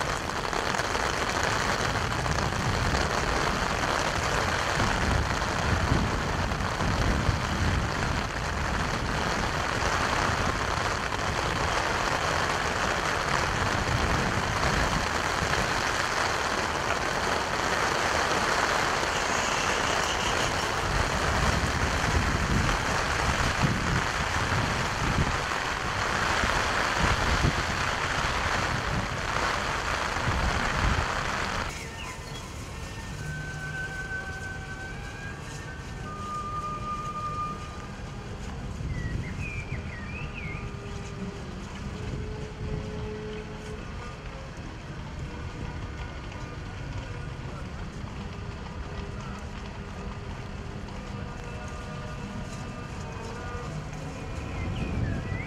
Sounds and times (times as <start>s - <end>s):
Outside, rural or natural: 0.0s - 55.4s.